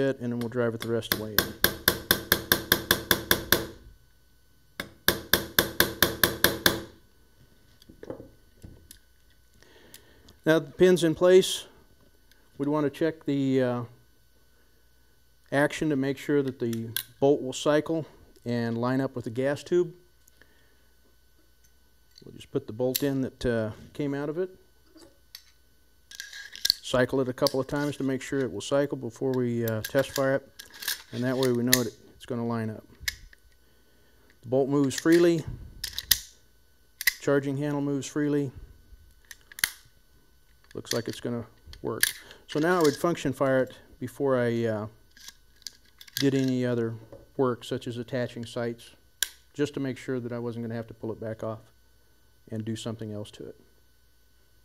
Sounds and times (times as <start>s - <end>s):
Speech: 0.0s - 1.5s, 10.4s - 11.8s, 12.6s - 14.0s, 15.5s - 20.0s, 22.2s - 24.6s, 26.8s - 30.5s, 31.1s - 32.9s, 34.5s - 35.6s, 37.2s - 38.6s, 40.7s - 45.0s, 46.2s - 49.0s, 49.6s - 51.8s, 52.5s - 53.6s.